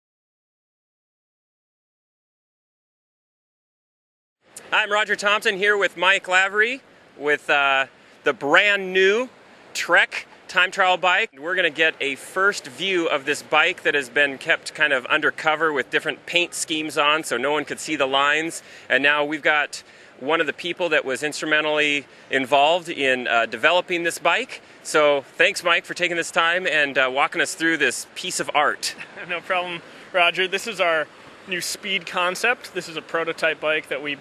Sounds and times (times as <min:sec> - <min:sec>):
Speech: 0:04.6 - 0:34.2.